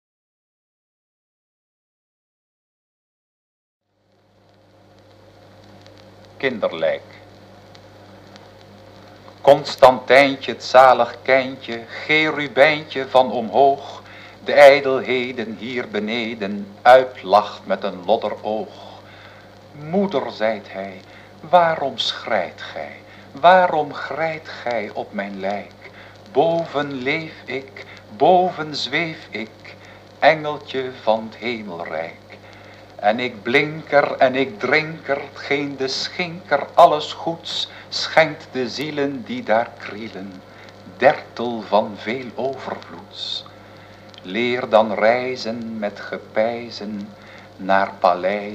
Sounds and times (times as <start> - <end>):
Speech: 6.4 - 7.3, 9.4 - 19.1, 19.7 - 32.4, 33.0 - 43.5, 44.2 - 48.5.